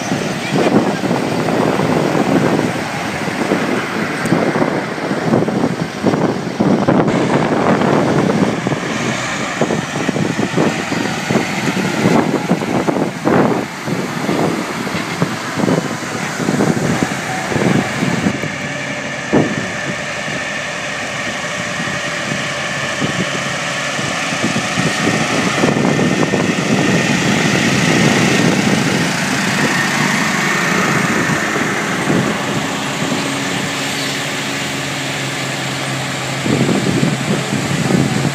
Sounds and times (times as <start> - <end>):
Vehicle: 0.0 - 38.3.